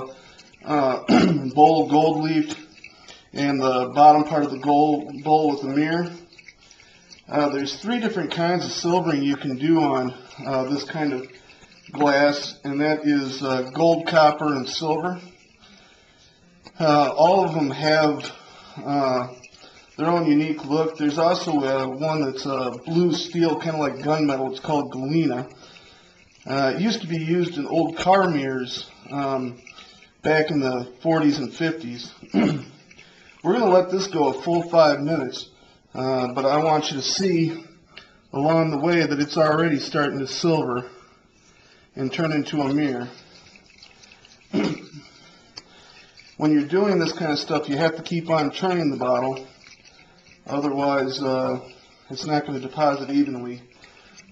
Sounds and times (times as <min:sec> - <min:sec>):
Speech: 0:00.0 - 0:02.7, 0:03.3 - 0:06.3, 0:07.3 - 0:15.4, 0:16.8 - 0:19.4, 0:20.0 - 0:25.5, 0:26.4 - 0:29.6, 0:30.2 - 0:32.5, 0:33.4 - 0:41.0, 0:42.0 - 0:43.2, 0:46.4 - 0:49.6, 0:50.4 - 0:53.7.